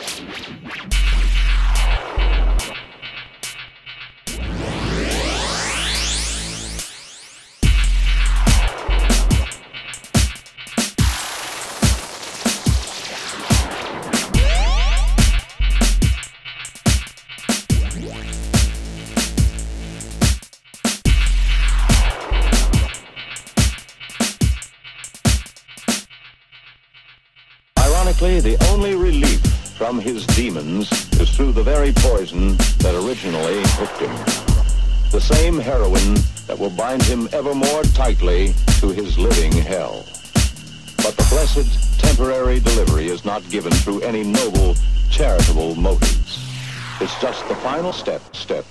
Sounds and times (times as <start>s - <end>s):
Dubstep: 0.0s - 26.1s, 27.8s - 48.7s
Speech: 27.8s - 34.3s, 35.1s - 40.0s, 41.0s - 46.4s, 47.0s - 48.7s.